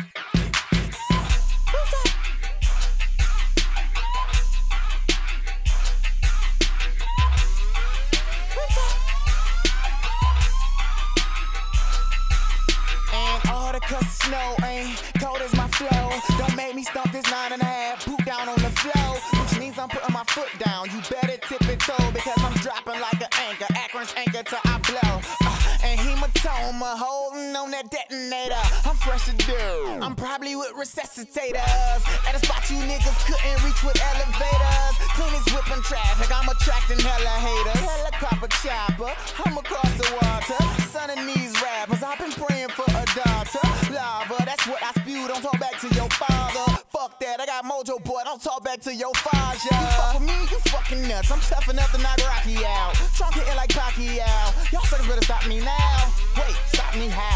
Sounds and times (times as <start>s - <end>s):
Music: 0.0s - 57.3s.